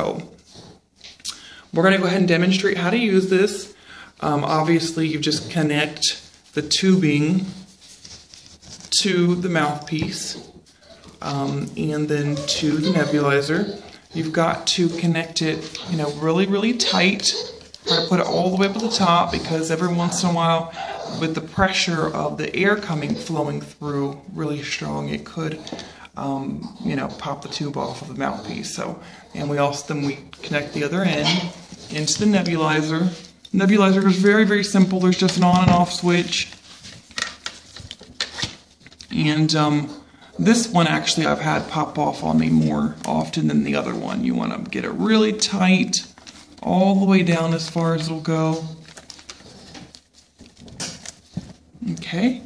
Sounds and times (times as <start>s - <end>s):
Speech: 0.0s - 0.4s, 1.7s - 7.7s, 8.9s - 10.6s, 11.2s - 36.6s, 39.1s - 48.8s, 51.8s - 52.4s
Dog: 12.2s - 22.2s.